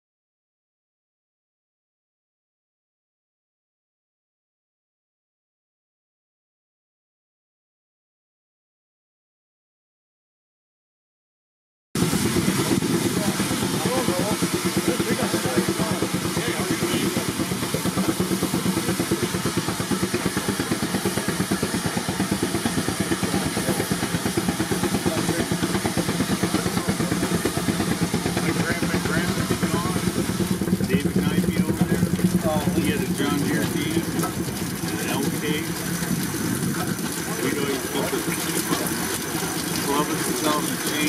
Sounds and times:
Heavy engine (low frequency): 12.0 - 41.0
Speech: 12.6 - 17.8, 18.6 - 27.5, 28.2 - 30.2, 30.8 - 35.8, 37.2 - 39.0, 39.8 - 41.0.

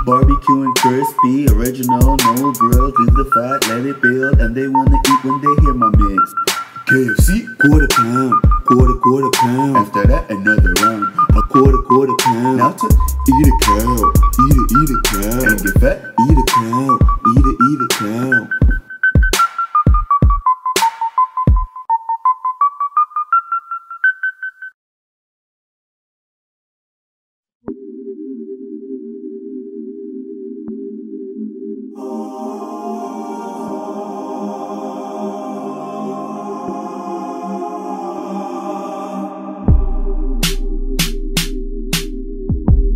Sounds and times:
Music: 0.0 - 24.8, 27.7 - 42.9.

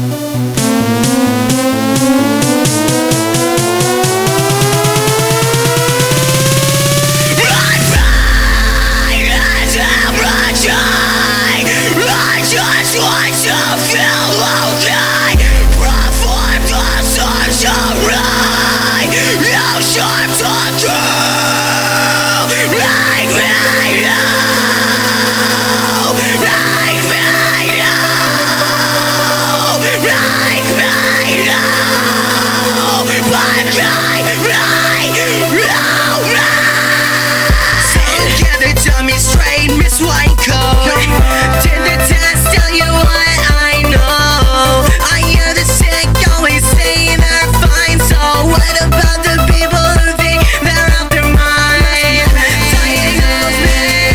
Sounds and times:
Music: 0.0 - 54.1.

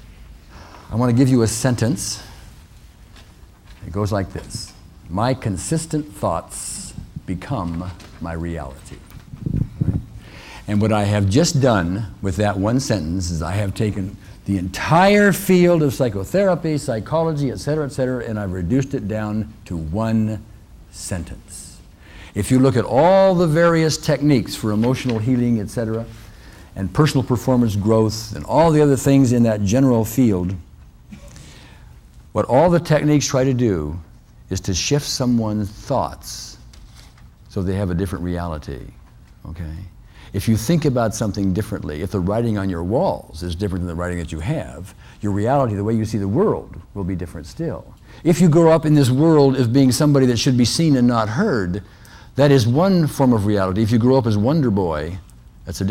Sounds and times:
Speech: 0.9 - 2.4, 3.8 - 9.1, 10.7 - 21.8, 22.4 - 26.2, 26.8 - 30.7, 32.3 - 36.7, 37.5 - 55.9.

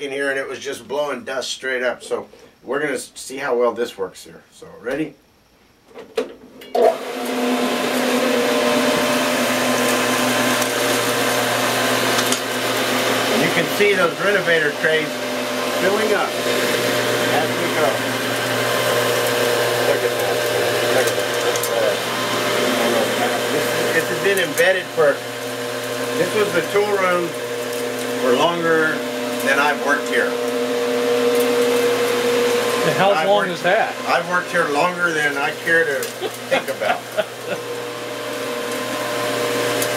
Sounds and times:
Vacuum cleaner: 6.7 - 39.9.

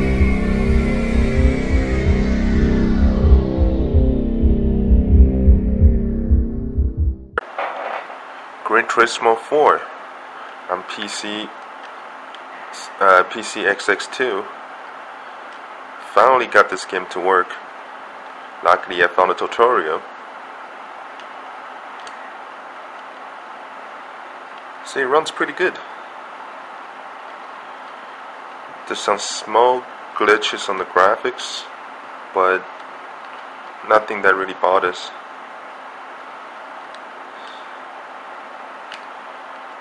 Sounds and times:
Speech: 8.6 - 10.0, 10.7 - 11.6, 12.7 - 14.6, 16.0 - 17.7, 18.6 - 20.1, 24.8 - 26.0, 28.9 - 31.7, 32.4 - 32.7, 33.8 - 35.2.

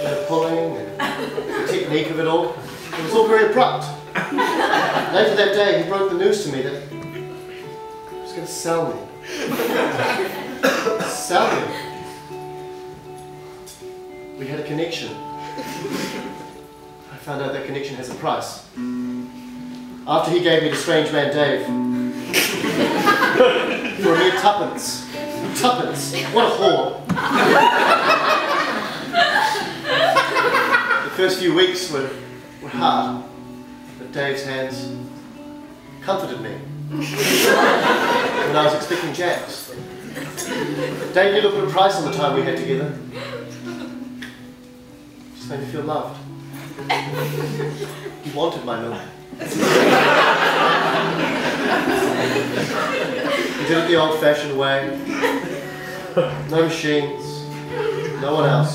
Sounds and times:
Music: 0.0 - 58.7.

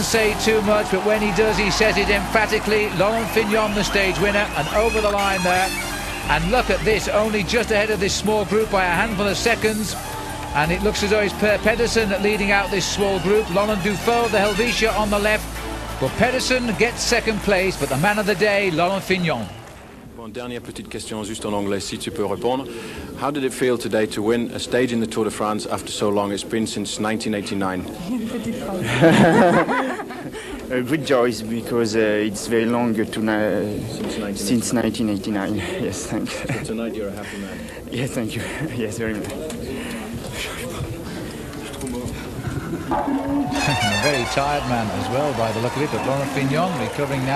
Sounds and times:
Speech: 0.0 - 10.0, 10.6 - 15.4, 16.0 - 19.5, 20.2 - 29.2, 30.7 - 42.2, 43.6 - 47.3
Inside, large room or hall: 0.0 - 47.3.

